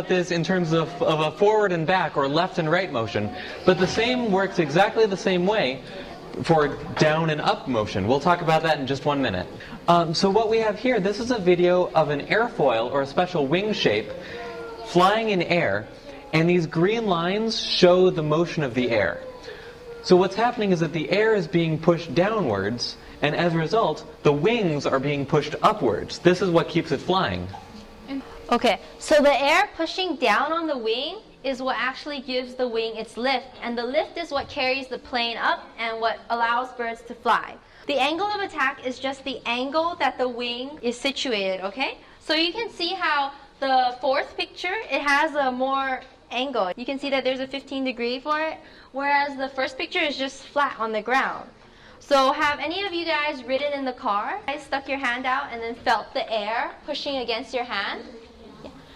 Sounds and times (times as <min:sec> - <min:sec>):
Female speech, woman speaking: 0:28.1 - 0:58.8.